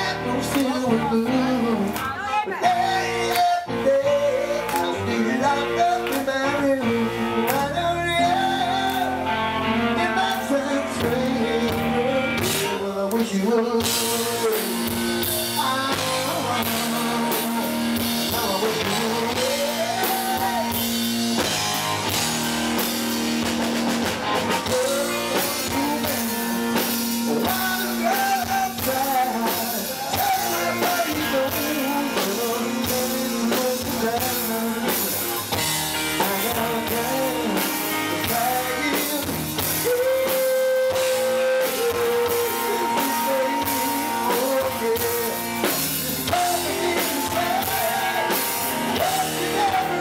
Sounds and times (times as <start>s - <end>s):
Speech: 0.0s - 3.1s
Music: 0.0s - 50.0s.